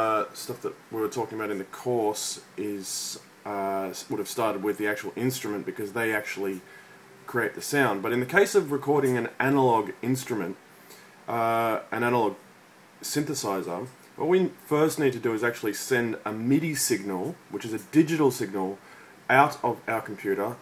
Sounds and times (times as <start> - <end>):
Speech: 0.0 - 6.7, 7.3 - 10.6, 11.3 - 12.4, 13.0 - 20.6.